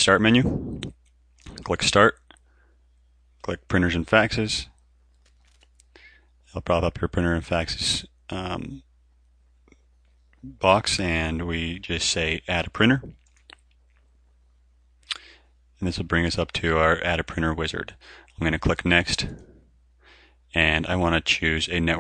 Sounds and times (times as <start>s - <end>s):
Speech: 0.0s - 0.9s, 1.5s - 2.3s, 3.4s - 4.8s, 6.5s - 8.9s, 10.4s - 13.2s, 15.1s - 19.4s, 20.5s - 22.0s.